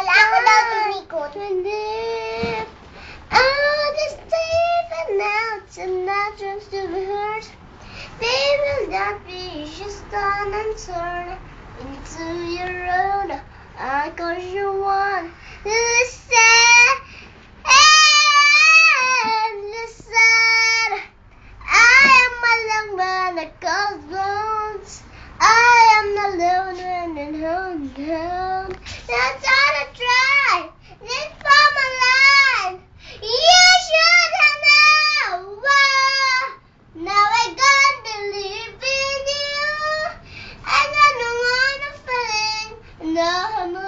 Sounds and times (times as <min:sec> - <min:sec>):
Child singing: 0:00.0 - 0:02.7, 0:03.3 - 0:07.5, 0:08.2 - 0:17.0, 0:17.6 - 0:21.0, 0:21.7 - 0:43.8.